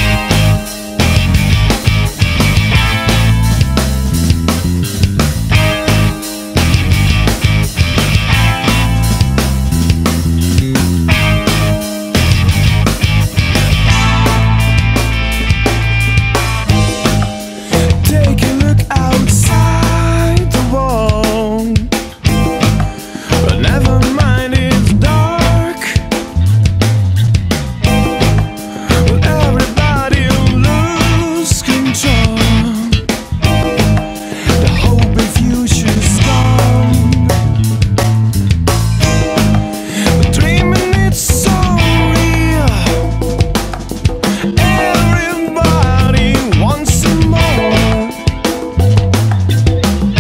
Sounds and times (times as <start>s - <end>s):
Music: 0.0s - 50.2s.